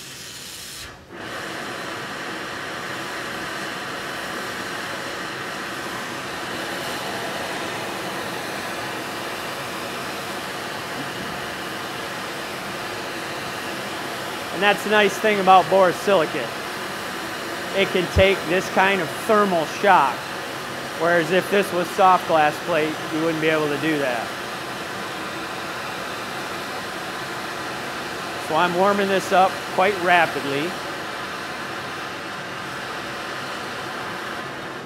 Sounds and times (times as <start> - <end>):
Speech: 14.5 - 16.6, 17.7 - 20.3, 21.0 - 24.3, 28.4 - 30.8.